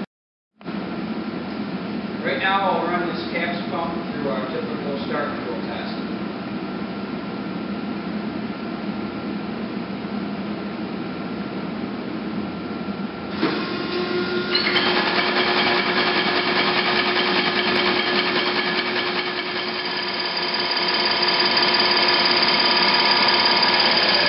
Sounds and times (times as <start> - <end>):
Speech: 2.2 - 6.1.